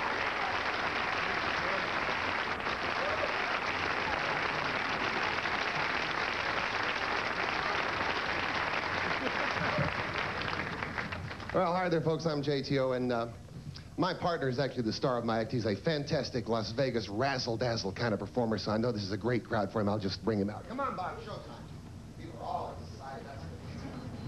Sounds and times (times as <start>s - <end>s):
Speech: 11.6s - 13.4s, 14.0s - 24.0s.